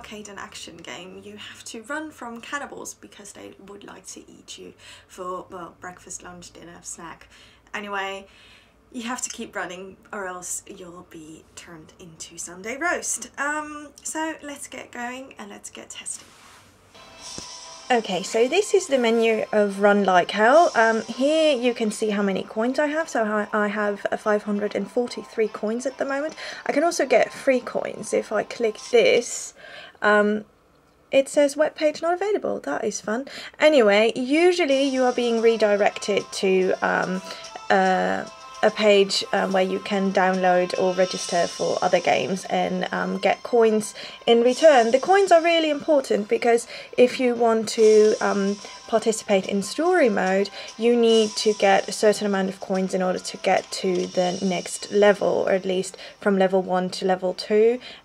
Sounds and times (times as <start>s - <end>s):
Speech: 0.0s - 8.3s, 9.0s - 16.3s, 17.9s - 30.5s, 31.1s - 57.8s
Music: 16.9s - 29.4s, 34.4s - 58.0s.